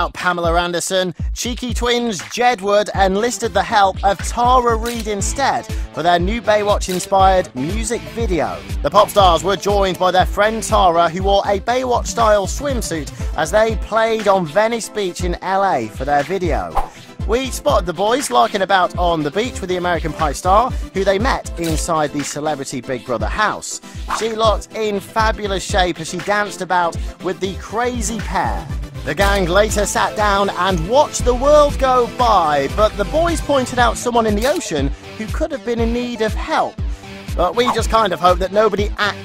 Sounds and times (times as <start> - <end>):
Speech: 0.0 - 36.8, 37.4 - 39.2
Music: 0.0 - 39.2.